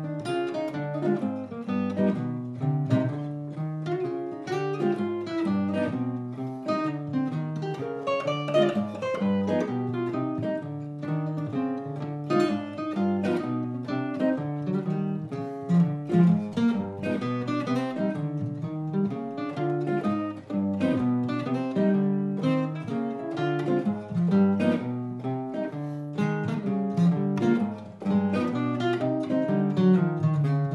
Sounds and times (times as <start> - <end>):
Strum: 0.0 - 30.7.